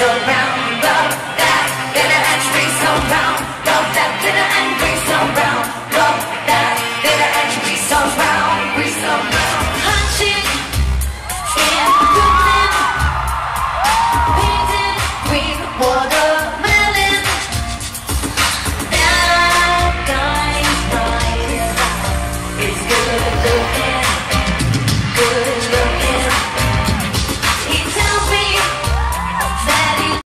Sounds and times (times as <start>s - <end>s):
Music: 0.0s - 30.2s.